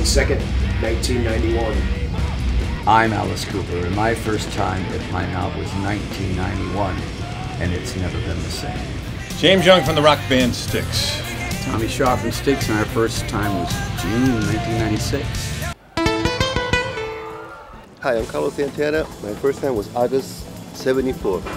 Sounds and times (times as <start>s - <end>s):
Speech: 0.0s - 1.8s, 2.9s - 15.4s, 18.0s - 21.5s
Music: 0.0s - 21.5s.